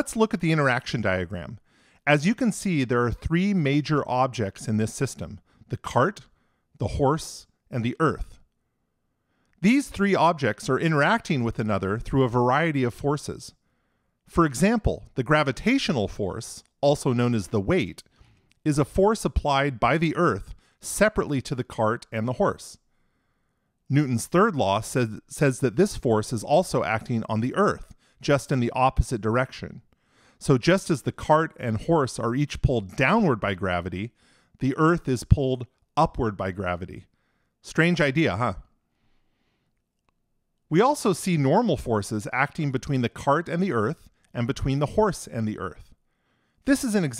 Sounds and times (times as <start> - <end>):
Speech: 0.0 - 8.4, 9.6 - 13.6, 14.3 - 22.8, 23.9 - 38.7, 40.7 - 46.0, 46.7 - 47.1.